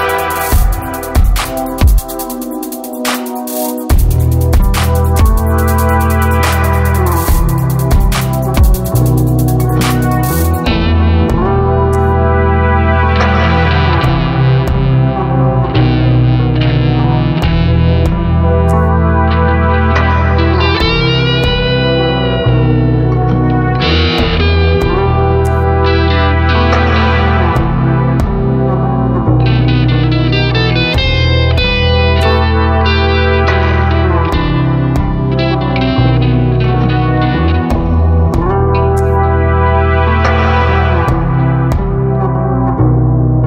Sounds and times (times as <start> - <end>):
Distortion: 0.0 - 43.4
Effects unit: 0.0 - 43.4
Music: 0.0 - 43.4.